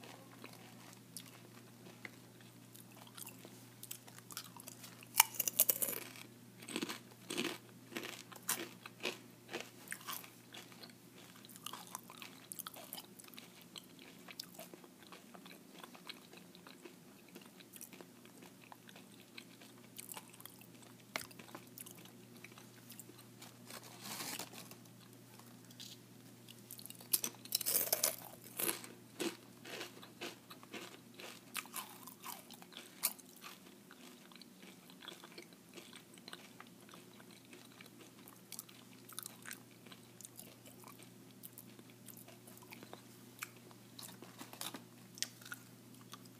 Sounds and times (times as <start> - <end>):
Crunch: 0.0 - 26.0, 26.7 - 46.3.